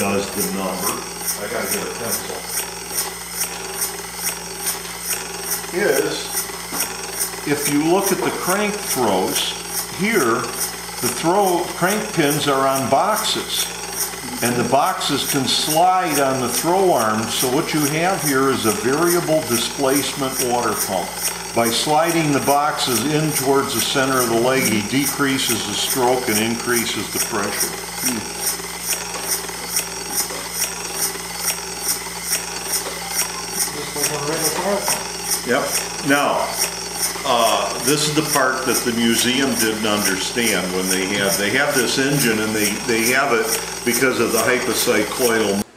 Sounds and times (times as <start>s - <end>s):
Speech: 0.0s - 2.6s, 5.7s - 6.3s, 7.5s - 13.7s, 14.4s - 28.3s, 33.6s - 36.6s, 37.3s - 45.7s
Engine: 0.0s - 45.7s.